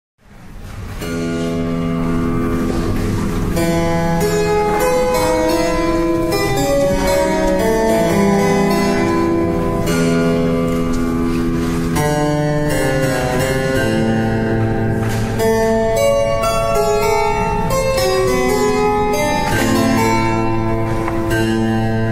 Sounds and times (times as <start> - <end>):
Piano: 0.2 - 22.1.